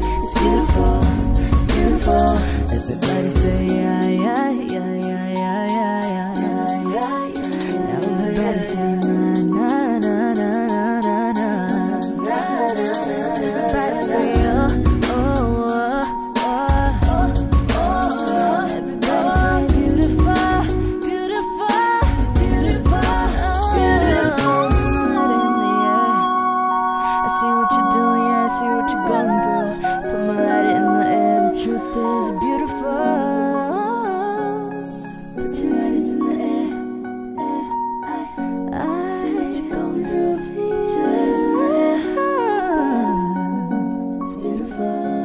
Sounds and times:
Music: 0:00.0 - 0:45.2.

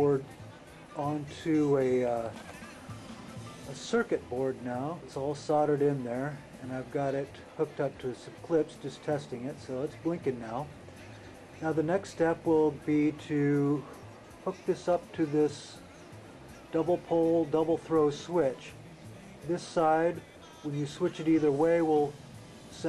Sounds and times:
Speech: 0:00.0 - 0:00.4, 0:01.0 - 0:02.4, 0:03.7 - 0:10.7, 0:11.6 - 0:15.8, 0:16.7 - 0:18.8, 0:19.4 - 0:22.2
Music: 0:00.0 - 0:22.8.

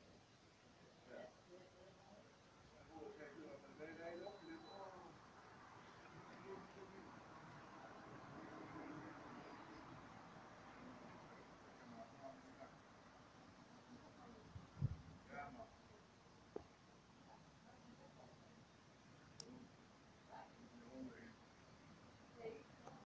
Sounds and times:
Speech: 0:01.0 - 0:05.2, 0:06.2 - 0:07.2, 0:15.2 - 0:16.0.

